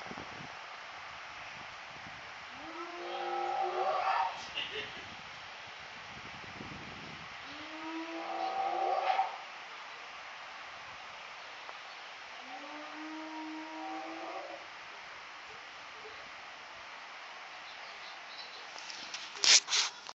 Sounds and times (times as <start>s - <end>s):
Howl: 2.6s - 4.4s, 7.5s - 9.4s, 12.4s - 14.6s.